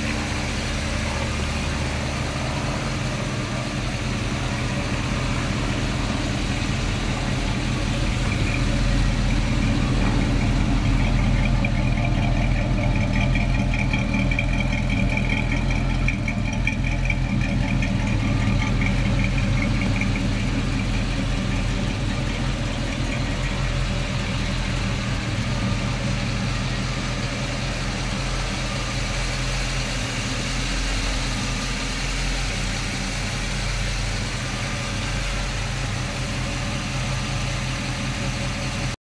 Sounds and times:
Car: 0:00.0 - 0:39.0.

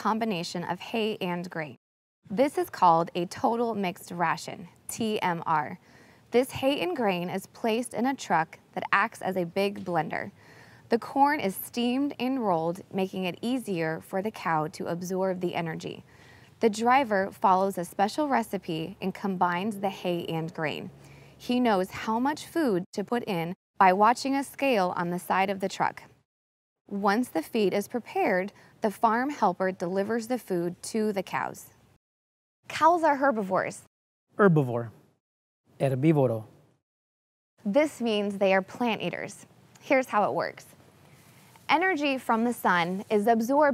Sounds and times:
Speech: 0:00.0 - 0:05.8, 0:06.4 - 0:10.3, 0:10.9 - 0:16.0, 0:16.6 - 0:26.1, 0:26.9 - 0:31.8, 0:32.7 - 0:35.0, 0:35.8 - 0:36.5, 0:37.7 - 0:40.7, 0:41.7 - 0:43.7.

